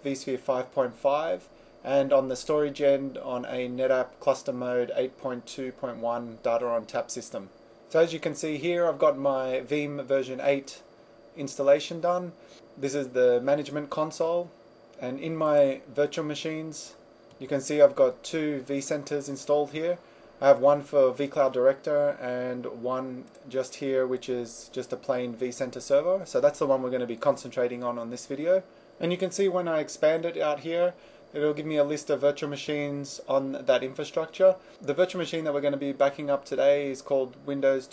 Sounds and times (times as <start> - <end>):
Speech: 0.0 - 37.9.